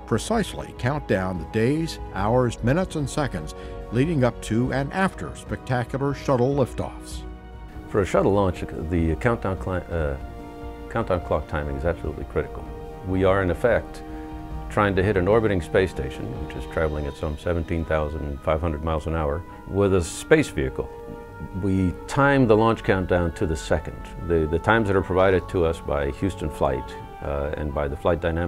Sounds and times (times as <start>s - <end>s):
Speech: 0.0s - 7.2s, 7.9s - 10.2s, 10.9s - 14.0s, 14.7s - 28.4s
Music: 0.0s - 28.4s.